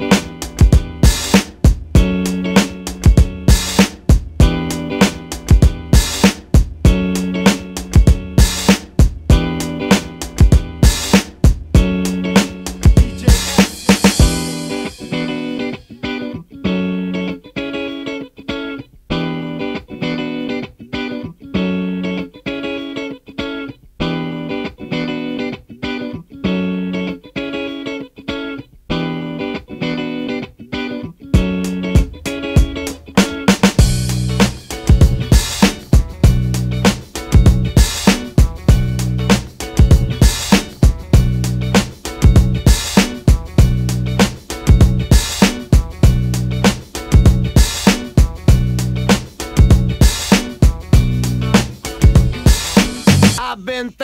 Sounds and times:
Electric guitar: 0.0 - 53.4.

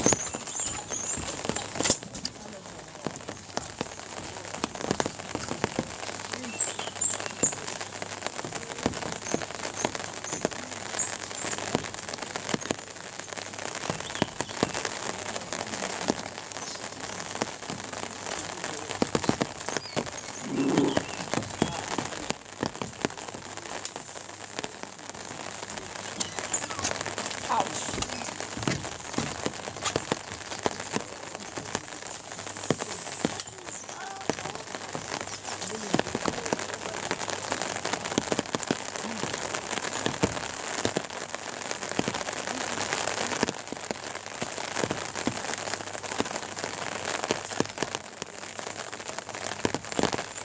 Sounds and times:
Rain on surface: 0.0 - 50.4.

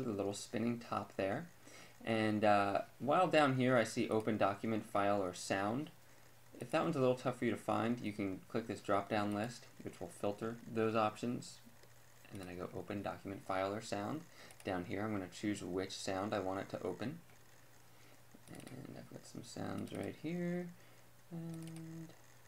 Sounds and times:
Speech: 0.0 - 5.9, 6.6 - 11.6, 12.3 - 17.2, 18.5 - 20.8.

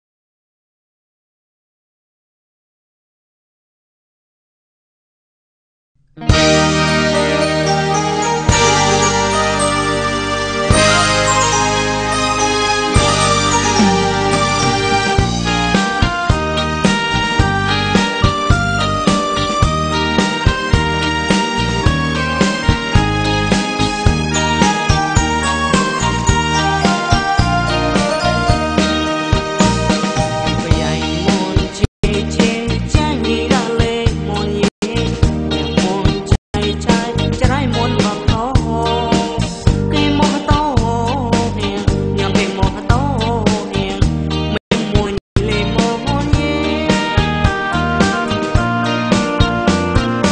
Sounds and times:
Music: 6.0 - 50.3.

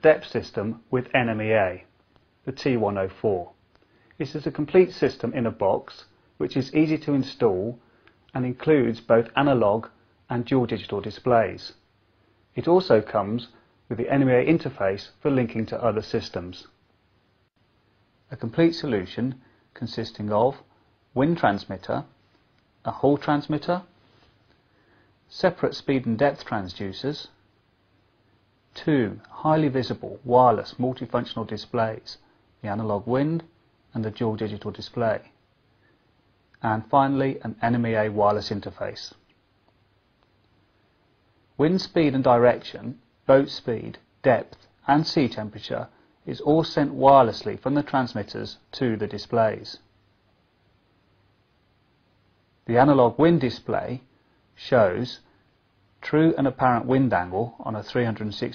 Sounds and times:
Speech: 0.0 - 3.6, 4.2 - 11.9, 12.5 - 16.8, 18.3 - 22.2, 22.8 - 24.0, 25.3 - 27.4, 28.7 - 35.4, 36.6 - 39.3, 41.6 - 49.9, 52.6 - 55.3, 56.0 - 58.5.

